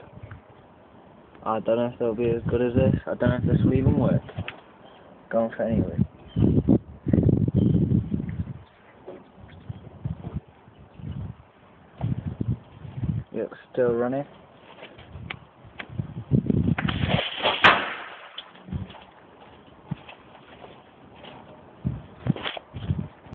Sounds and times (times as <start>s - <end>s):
Speech: 1.4s - 4.3s, 5.3s - 6.1s, 13.3s - 14.4s.